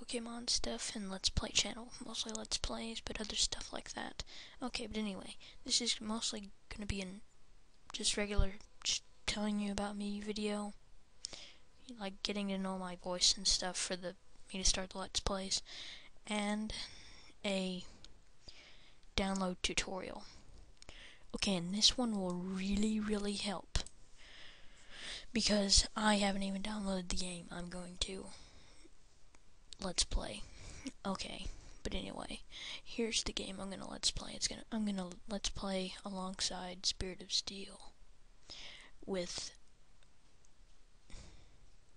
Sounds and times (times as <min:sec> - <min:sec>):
Speech: 0:00.0 - 0:07.2, 0:07.9 - 0:10.8, 0:11.8 - 0:18.0, 0:19.2 - 0:20.4, 0:21.3 - 0:23.9, 0:25.2 - 0:28.4, 0:29.8 - 0:38.0, 0:39.0 - 0:39.6.